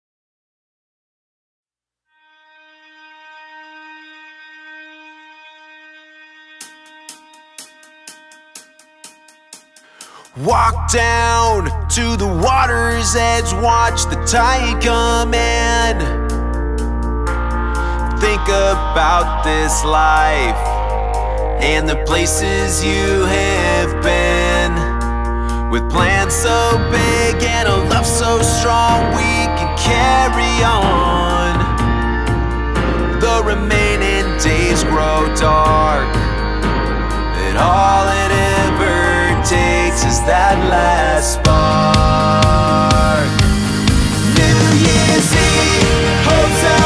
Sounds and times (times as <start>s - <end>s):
Hi-hat: 6.6s - 14.4s.